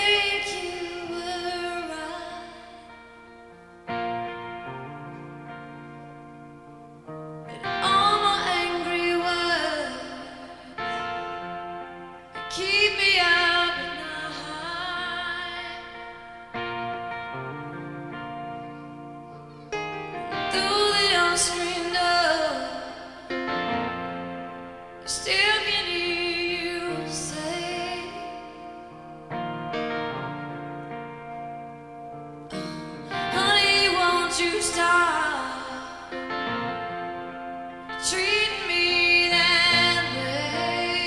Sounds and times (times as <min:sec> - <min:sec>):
Music: 0:00.0 - 0:41.0.